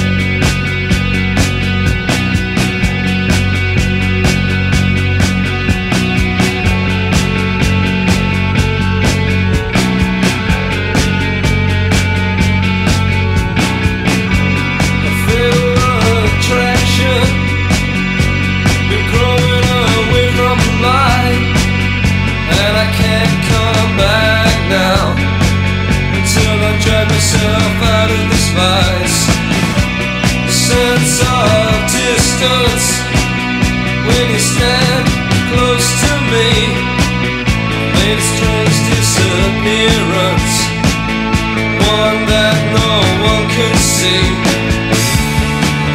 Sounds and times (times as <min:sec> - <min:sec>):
Music: 0:00.0 - 0:45.9.